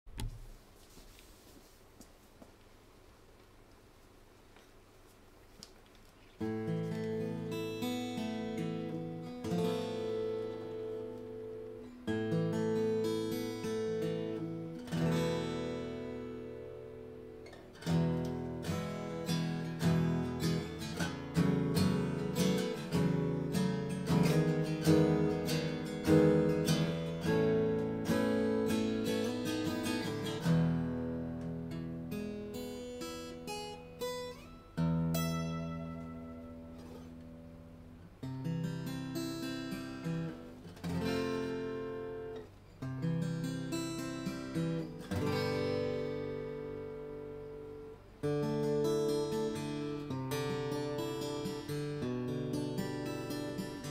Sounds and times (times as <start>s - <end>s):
Music: 6.4s - 53.9s.